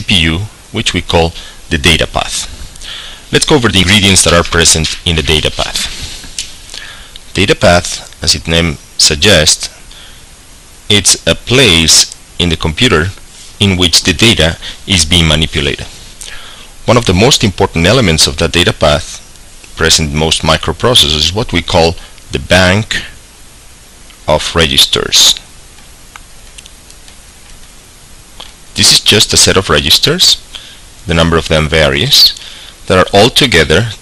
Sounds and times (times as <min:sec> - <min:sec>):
Speech: 0:00.0 - 0:02.6, 0:03.3 - 0:06.1, 0:07.3 - 0:09.9, 0:10.9 - 0:16.0, 0:16.8 - 0:19.2, 0:19.8 - 0:23.2, 0:24.2 - 0:25.5, 0:28.8 - 0:34.0.